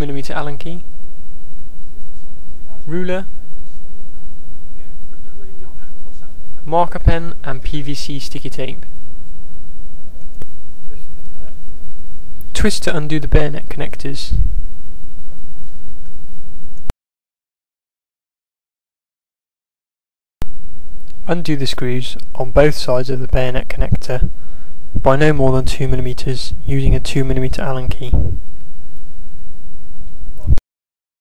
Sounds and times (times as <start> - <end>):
Speech: 0.0 - 0.9, 2.6 - 8.9, 10.8 - 11.6, 12.5 - 14.4, 21.2 - 24.3, 25.0 - 28.3, 30.4 - 30.6.